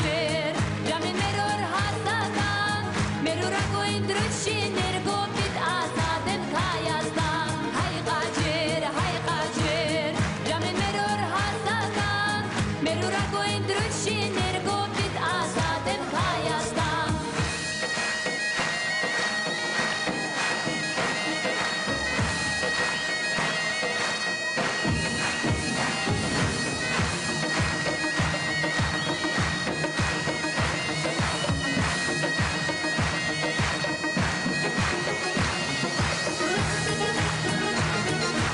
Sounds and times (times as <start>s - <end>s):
Wind instrument, woodwind instrument: 17.3s - 38.5s.